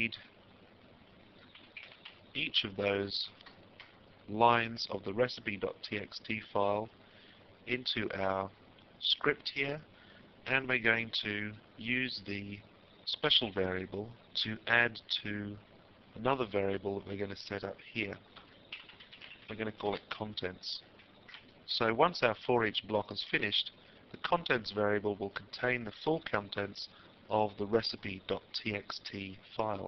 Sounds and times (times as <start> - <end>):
Speech: 0.0 - 0.3, 2.4 - 3.4, 4.3 - 6.9, 7.7 - 9.9, 10.5 - 15.6, 16.2 - 18.2, 19.5 - 20.8, 21.7 - 29.8.